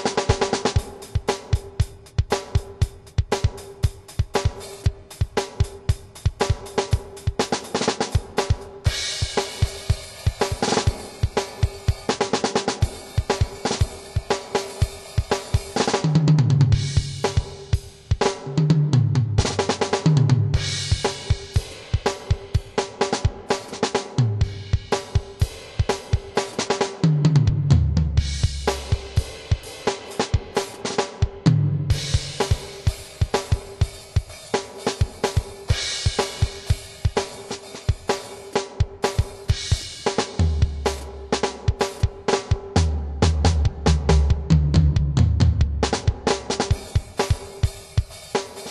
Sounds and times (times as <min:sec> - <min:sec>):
Drum kit: 0:00.0 - 0:48.7
Bass drum: 0:15.2 - 0:22.8, 0:24.2 - 0:26.3, 0:27.0 - 0:29.7, 0:31.3 - 0:33.9, 0:39.5 - 0:47.5.